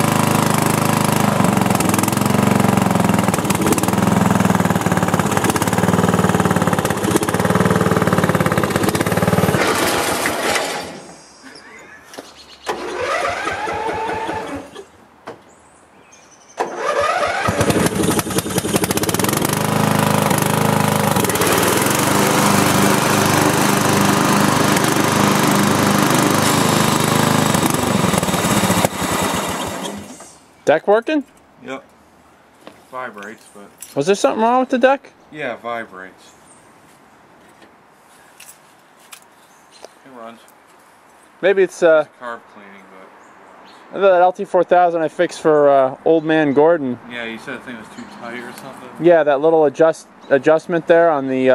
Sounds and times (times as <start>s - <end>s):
Vehicle: 0.0s - 51.5s
Engine starting: 9.0s - 11.2s, 12.6s - 14.9s, 16.6s - 19.2s, 28.8s - 30.4s.